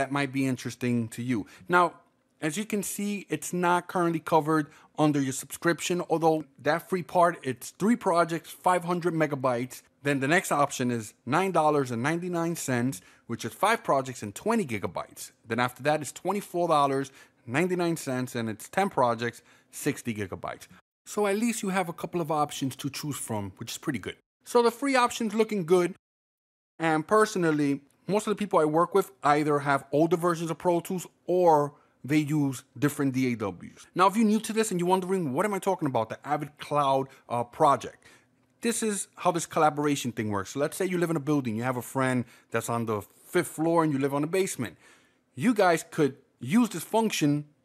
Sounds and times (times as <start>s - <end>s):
Speech: 0.0s - 26.0s, 26.8s - 44.8s, 45.4s - 47.6s.